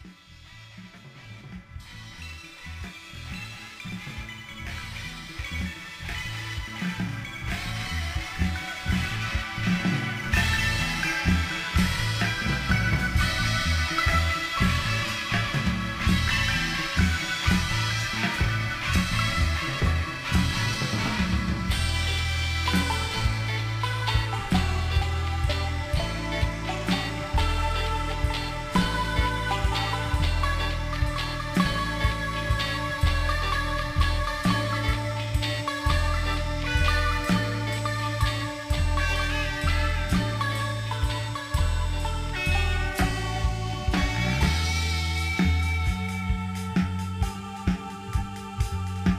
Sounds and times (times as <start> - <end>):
Music: 0.0 - 49.1.